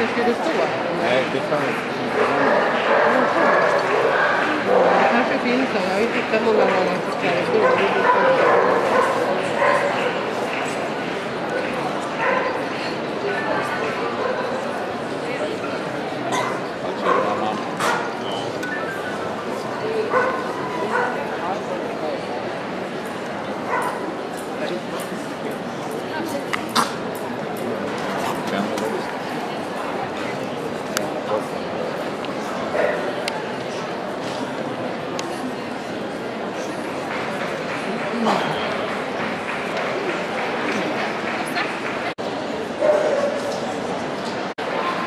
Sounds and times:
Speech: 0.0s - 22.8s, 23.9s - 45.0s
Bow-wow: 2.2s - 5.2s, 7.6s - 10.2s, 16.4s - 18.2s, 20.1s - 21.2s, 42.8s - 43.6s.

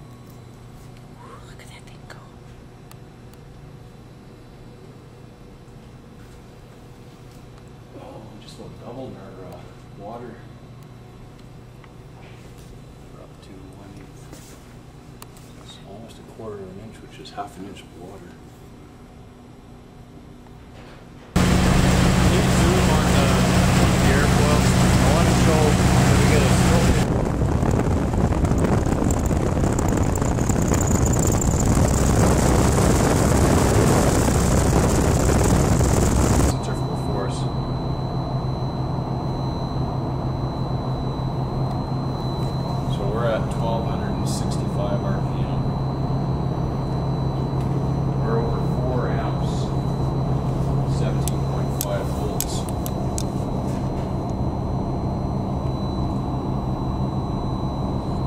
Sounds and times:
Speech: 7.9s - 10.5s, 13.1s - 14.3s, 15.6s - 18.4s, 22.3s - 27.1s, 36.5s - 37.6s, 42.9s - 45.7s, 48.2s - 49.8s, 50.9s - 52.7s
Wind noise (microphone): 26.8s - 36.5s.

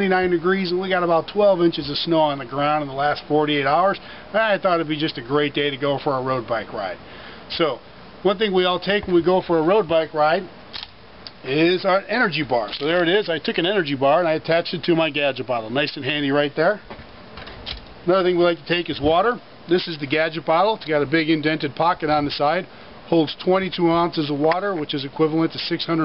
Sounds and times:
Speech: 0.0s - 10.5s, 11.4s - 16.9s, 18.0s - 26.0s.

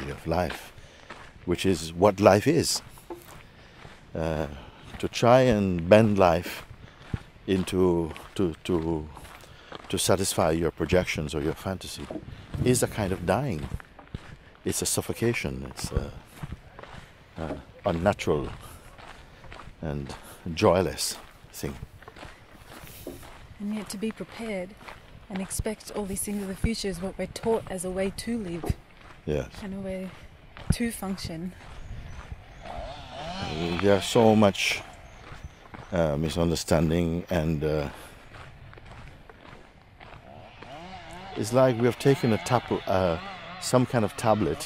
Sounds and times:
Walk, footsteps: 0.0s - 32.4s, 34.6s - 40.7s
Speech: 1.5s - 2.8s, 17.4s - 18.6s, 33.5s - 34.8s, 41.4s - 44.6s.

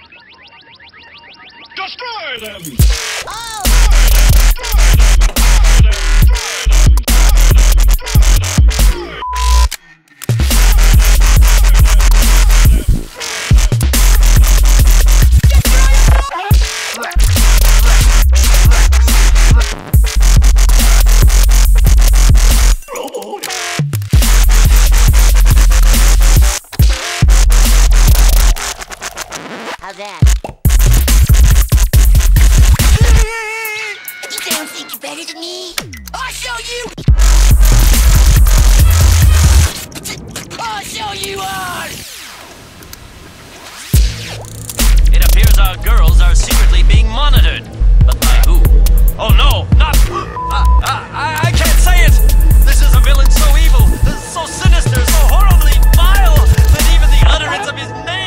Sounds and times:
Speech: 1.8s - 3.9s, 29.8s - 30.3s, 33.0s - 37.0s, 40.6s - 42.0s, 45.1s - 58.2s
Dubstep: 2.5s - 42.4s, 43.6s - 57.6s
Drum machine: 2.6s - 9.7s, 10.3s - 28.8s, 29.8s - 33.8s, 35.8s - 39.8s, 44.0s - 57.4s.

